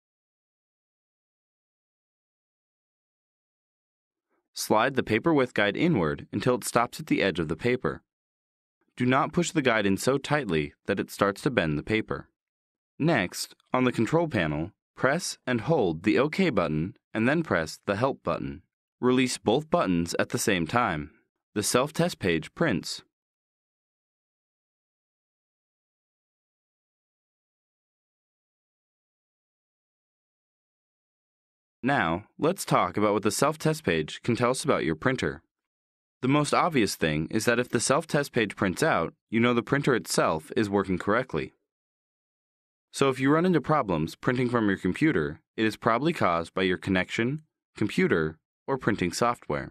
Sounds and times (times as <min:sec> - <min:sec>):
Speech: 0:04.6 - 0:08.1, 0:09.0 - 0:12.3, 0:13.0 - 0:23.1, 0:31.8 - 0:35.5, 0:36.2 - 0:41.6, 0:43.0 - 0:49.7.